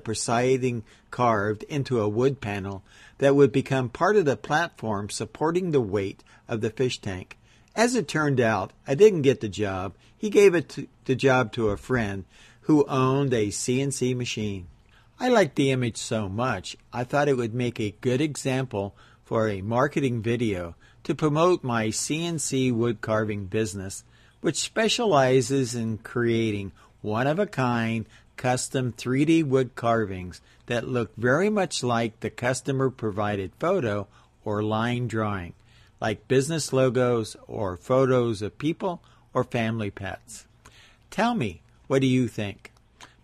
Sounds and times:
Speech: 0:00.0 - 0:40.5, 0:41.1 - 0:42.8.

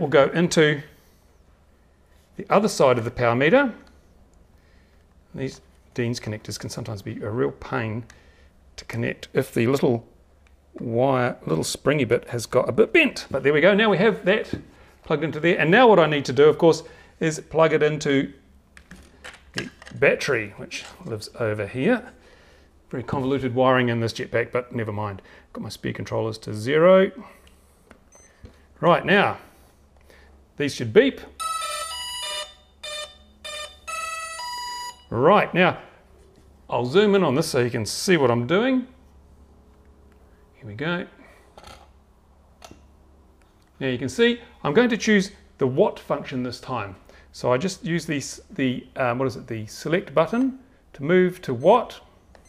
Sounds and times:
Speech: 0:00.0 - 0:00.9, 0:02.4 - 0:03.9, 0:05.3 - 0:08.1, 0:08.8 - 0:10.1, 0:10.8 - 0:18.4, 0:19.9 - 0:22.2, 0:22.9 - 0:27.4, 0:28.8 - 0:29.5, 0:30.6 - 0:31.4, 0:35.1 - 0:36.0, 0:36.7 - 0:39.0, 0:40.6 - 0:41.3, 0:43.8 - 0:52.1
Inside, small room: 0:00.0 - 0:52.4.

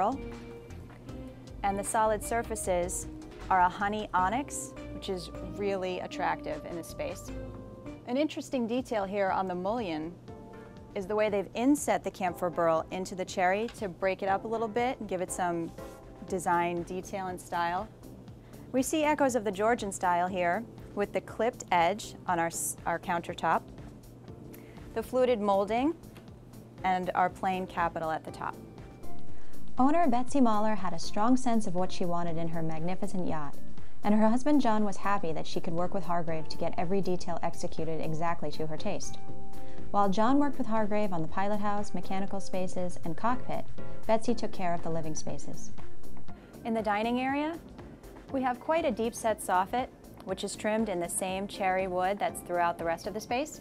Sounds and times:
Music: 0:00.0 - 0:53.6
Speech: 0:01.6 - 0:07.3, 0:08.1 - 0:10.2, 0:11.0 - 0:15.7, 0:16.3 - 0:17.9, 0:18.8 - 0:23.6, 0:25.0 - 0:26.0, 0:26.8 - 0:28.6, 0:29.8 - 0:39.2, 0:40.0 - 0:45.7, 0:46.7 - 0:47.6, 0:48.3 - 0:53.6.

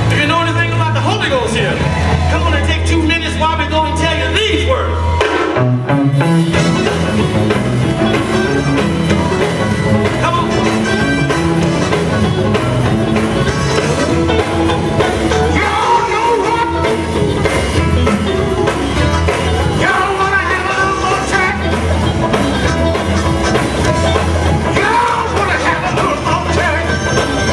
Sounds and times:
Music: 0:00.0 - 0:27.5.

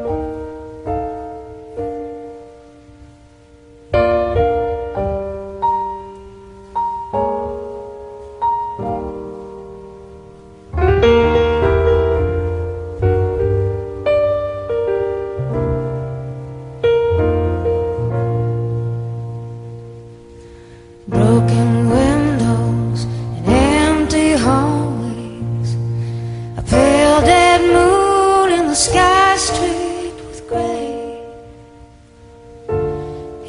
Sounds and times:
Music: 0:00.0 - 0:33.4.

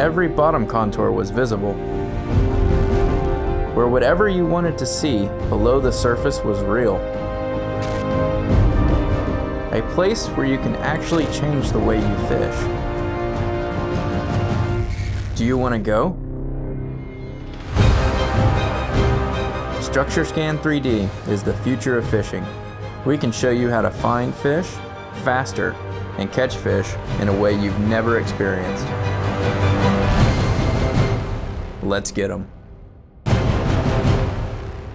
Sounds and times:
Theme music: 0:00.0 - 0:34.9.

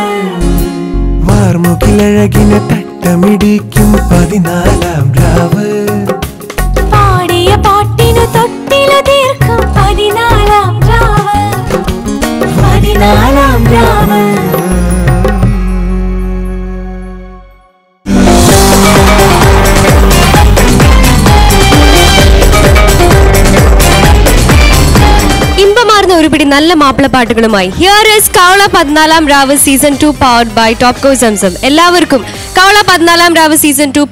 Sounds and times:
Female singing: 0:00.0 - 0:00.5, 0:07.0 - 0:11.8, 0:12.6 - 0:14.8
Music: 0:00.0 - 0:34.1
Male singing: 0:01.2 - 0:06.3, 0:12.9 - 0:15.5.

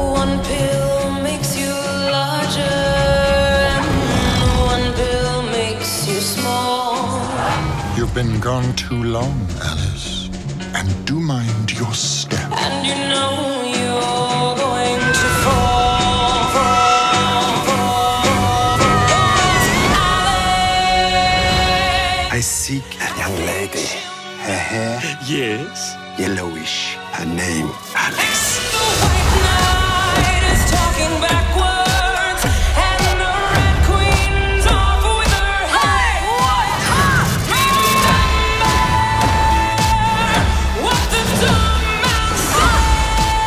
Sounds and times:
Music: 0:00.0 - 0:43.4
Speech: 0:08.0 - 0:12.6, 0:22.3 - 0:28.3.

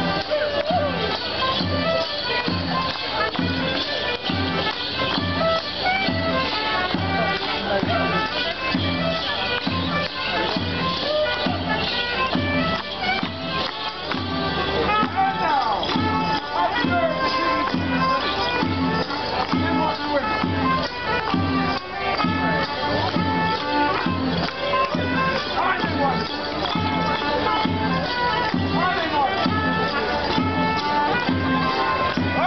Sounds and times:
Music: 0:00.0 - 0:32.4
Speech: 0:00.0 - 0:32.4.

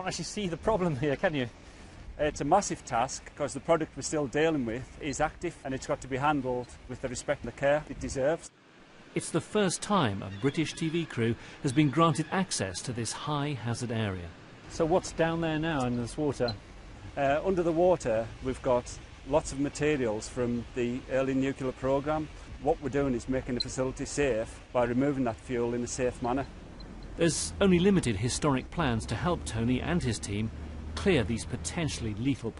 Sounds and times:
Speech: 0:00.0 - 0:01.5, 0:02.2 - 0:08.5, 0:09.2 - 0:16.6, 0:17.2 - 0:26.5, 0:27.2 - 0:32.5.

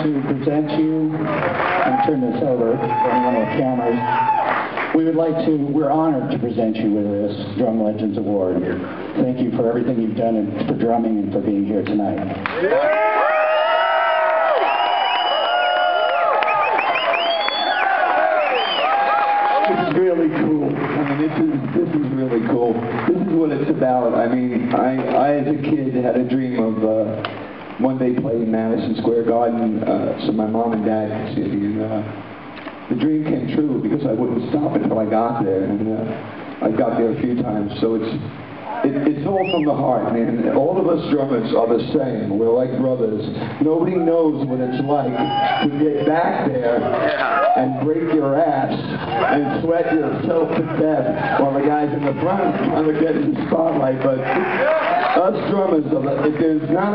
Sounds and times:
Speech: 0:00.0 - 0:04.1, 0:04.9 - 0:12.4, 0:19.7 - 0:27.2, 0:27.8 - 0:32.2, 0:32.9 - 0:54.4, 0:55.1 - 0:56.9.

